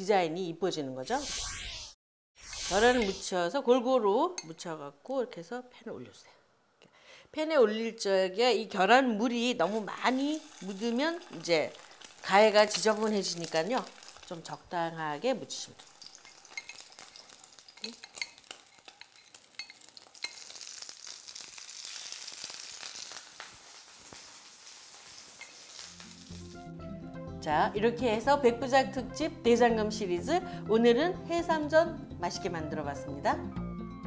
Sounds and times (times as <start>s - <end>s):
Sizzle: 2.4s - 3.3s, 9.4s - 26.7s
Frying (food): 9.6s - 26.7s
Stir: 15.8s - 20.5s.